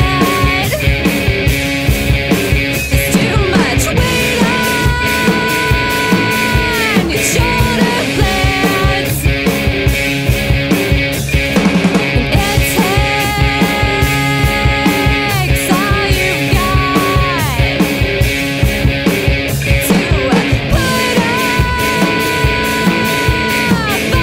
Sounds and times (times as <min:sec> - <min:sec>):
Punk rock: 0:00.0 - 0:24.2.